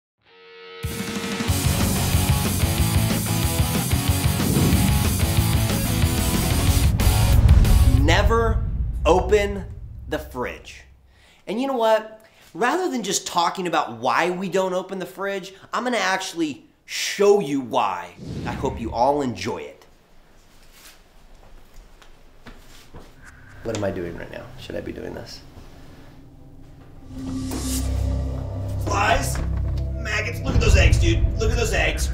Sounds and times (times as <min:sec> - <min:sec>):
Speech: 0:07.9 - 0:10.9, 0:11.5 - 0:19.9, 0:23.6 - 0:25.4, 0:28.8 - 0:29.4, 0:30.0 - 0:32.1.